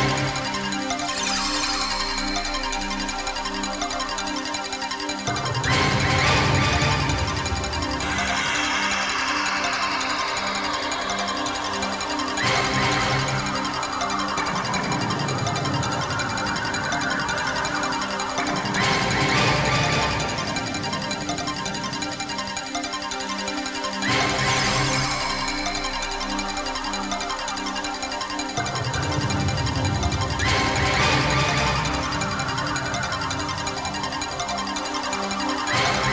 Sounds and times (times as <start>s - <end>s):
Music: 0.0s - 36.1s.